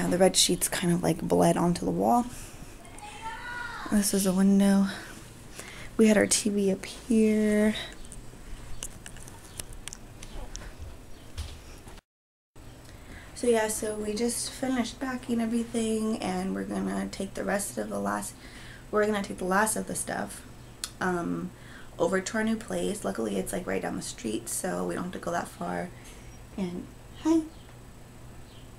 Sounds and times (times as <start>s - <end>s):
Speech: 0.0s - 5.1s, 6.0s - 7.9s, 13.4s - 18.4s, 19.0s - 20.4s, 21.0s - 25.9s, 26.6s - 27.5s
Inside, small room: 0.0s - 12.0s, 12.6s - 28.7s.